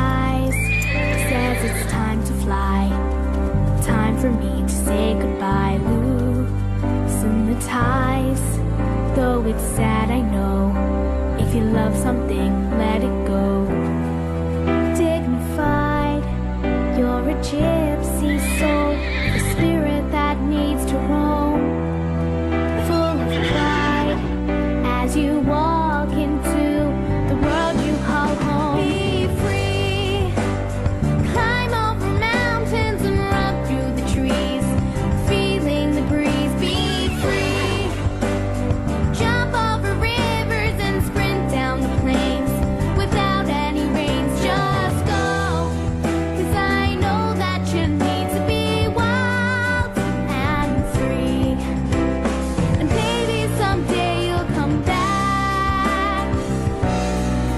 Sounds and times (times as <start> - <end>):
Music: 0.0 - 57.5.